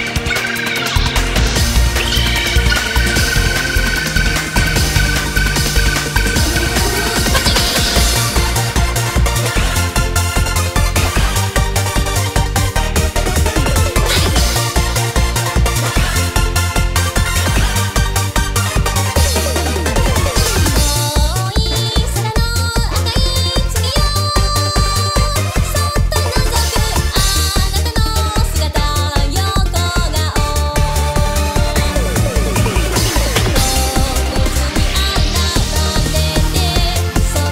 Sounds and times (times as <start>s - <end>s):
Music: 0.0s - 37.5s.